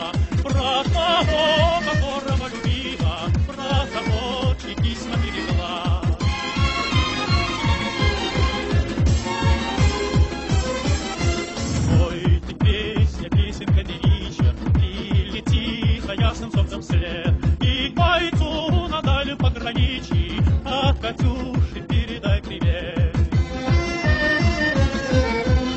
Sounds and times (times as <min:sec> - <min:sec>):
Techno: 0:00.0 - 0:25.7.